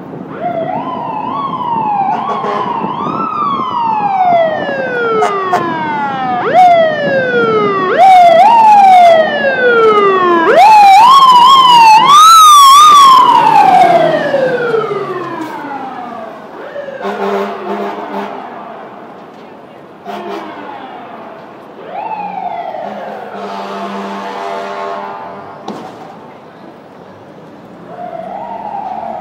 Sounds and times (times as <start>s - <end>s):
Fire engine, fire truck (siren): 0.0s - 26.4s, 27.4s - 29.2s
Truck: 0.0s - 29.2s.